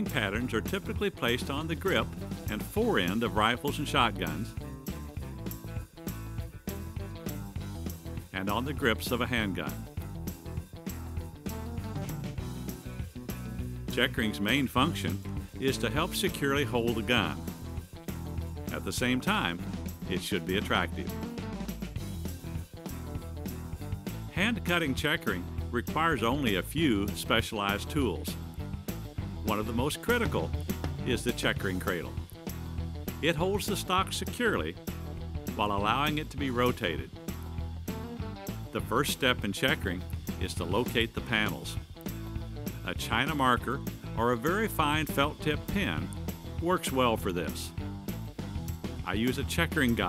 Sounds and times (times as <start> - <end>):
Speech: 0.0 - 4.6, 8.3 - 9.8, 13.9 - 17.5, 18.7 - 21.2, 24.3 - 28.4, 29.5 - 32.2, 33.2 - 34.8, 35.5 - 37.2, 38.8 - 41.8, 42.8 - 47.8, 49.0 - 50.0
Music: 0.0 - 50.0.